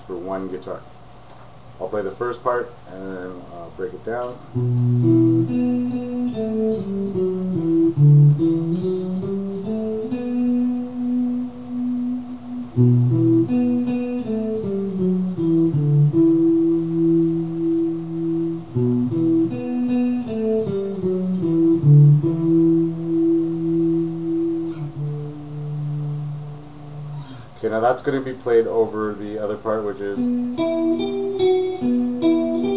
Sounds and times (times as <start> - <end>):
Speech: 0.0 - 0.9, 1.8 - 4.4, 27.6 - 30.4
Strum: 4.1 - 28.8.